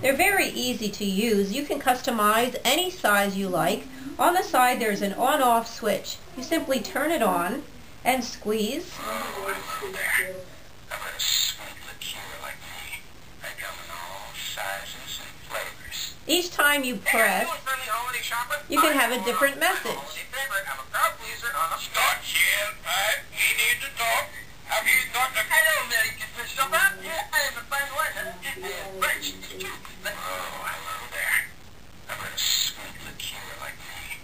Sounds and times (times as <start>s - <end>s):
Speech: 0.0s - 31.5s, 32.1s - 34.2s.